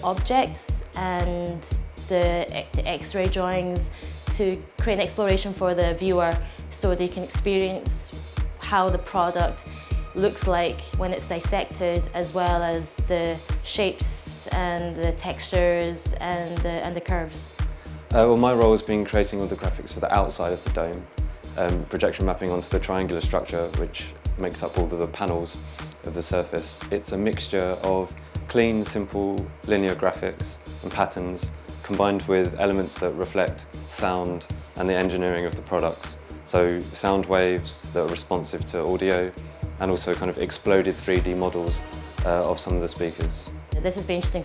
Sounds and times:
Speech: 0.0s - 17.5s, 18.1s - 44.4s
Music: 0.0s - 44.4s.

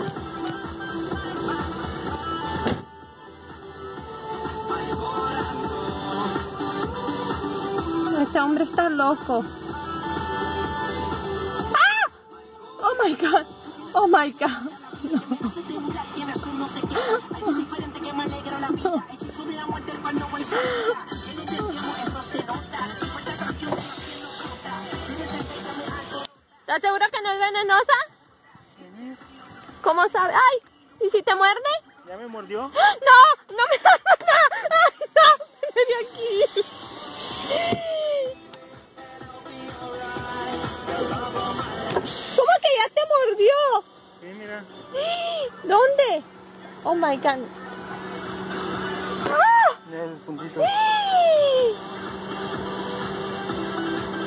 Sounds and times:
Music: 0.0s - 54.2s
Outside, urban or manmade: 0.0s - 54.2s.

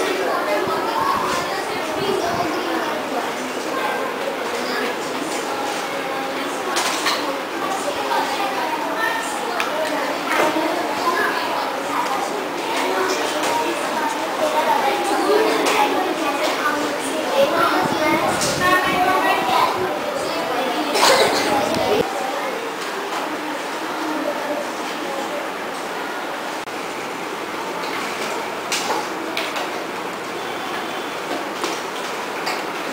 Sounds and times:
Speech: 0.0s - 26.6s.

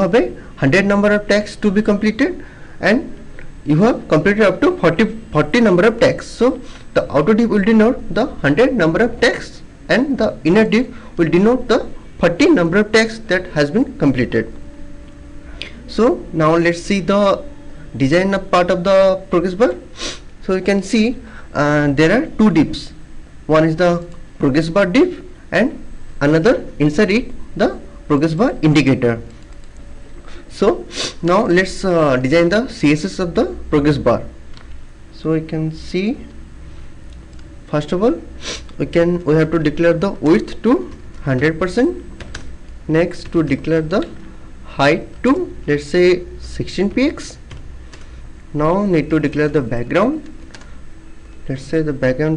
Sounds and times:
Speech: 0.0s - 14.5s, 15.9s - 19.9s, 20.5s - 29.3s, 30.5s - 34.4s, 35.1s - 36.4s, 37.7s - 42.0s, 42.9s - 47.4s, 48.5s - 50.4s, 51.5s - 52.3s.

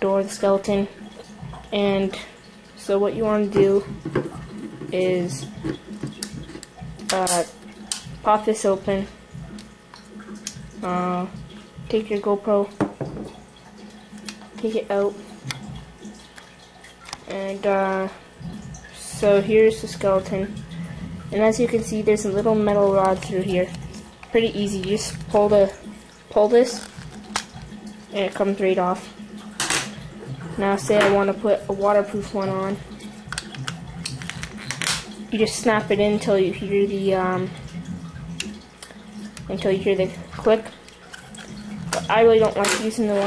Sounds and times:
Speech: 0.0s - 0.9s, 1.7s - 3.9s, 4.9s - 5.5s, 7.1s - 7.5s, 8.2s - 9.1s, 10.8s - 12.8s, 14.6s - 15.2s, 17.3s - 18.2s, 19.0s - 20.5s, 21.3s - 26.9s, 28.1s - 29.1s, 30.5s - 32.8s, 35.3s - 37.6s, 39.5s - 40.8s, 42.0s - 43.2s.

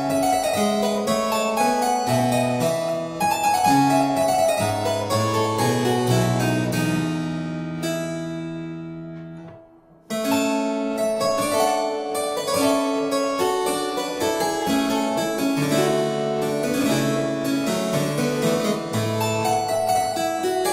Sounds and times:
Harpsichord: 0.0s - 20.7s.

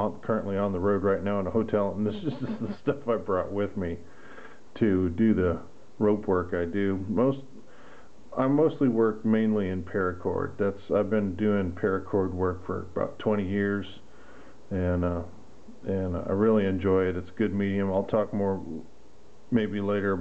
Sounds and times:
Speech: 0.0s - 4.1s, 4.8s - 7.6s, 8.3s - 14.1s, 14.7s - 18.9s, 19.5s - 20.2s.

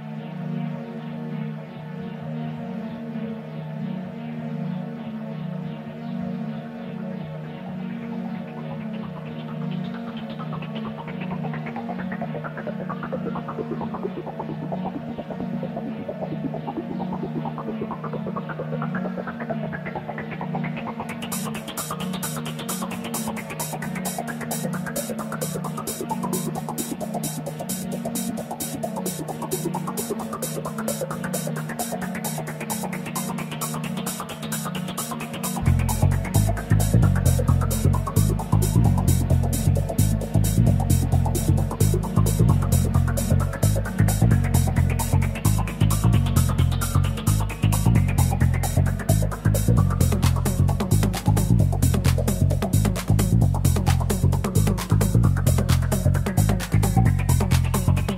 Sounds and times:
Techno: 0.0s - 58.1s.

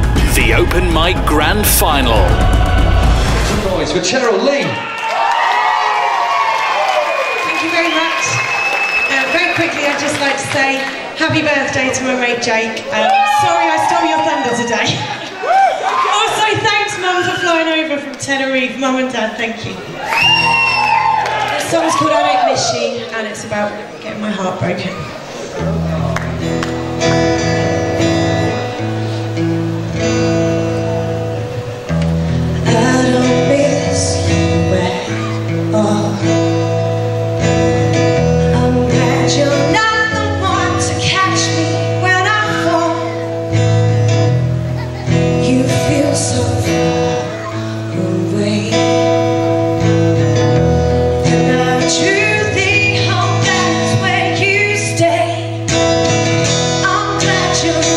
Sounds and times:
Music: 0.0s - 4.1s, 20.1s - 21.8s, 25.6s - 57.9s
Female singing: 32.6s - 36.4s, 38.5s - 43.2s, 45.4s - 47.2s, 48.0s - 49.4s, 51.2s - 55.6s, 56.8s - 57.9s.

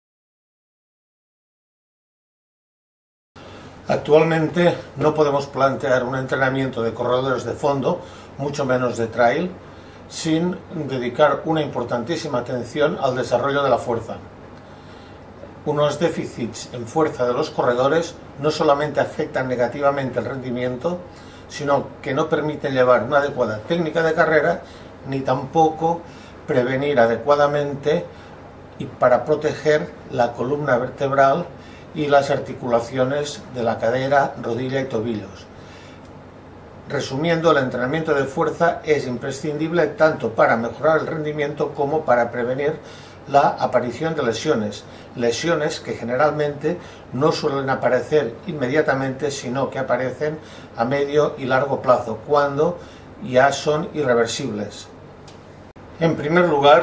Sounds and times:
Inside, small room: 3.4s - 56.8s
Speech: 3.9s - 14.3s, 15.6s - 28.2s, 28.8s - 35.5s, 36.9s - 55.0s, 56.0s - 56.8s.

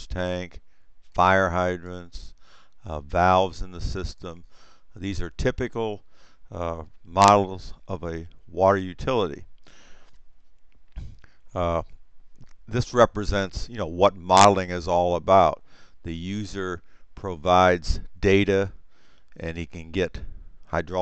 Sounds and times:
Speech: 0.0s - 0.6s, 1.2s - 2.3s, 2.9s - 4.4s, 5.0s - 9.5s, 11.6s - 11.9s, 12.7s - 18.8s, 19.4s - 21.0s.

